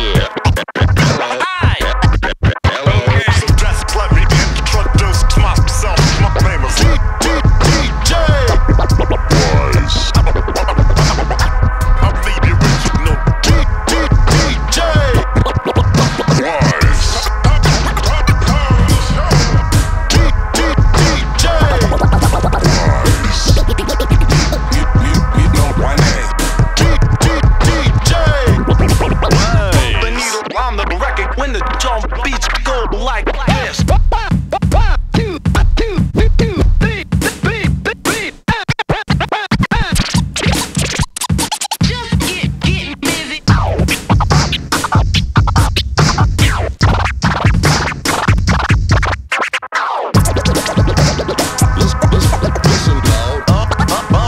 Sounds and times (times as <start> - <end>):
Speech: 0.0 - 0.4, 1.0 - 2.0, 2.6 - 4.1, 9.3 - 10.1, 16.3 - 17.6, 25.0 - 26.3, 28.2 - 38.8, 41.8 - 43.6
Music: 0.0 - 54.2.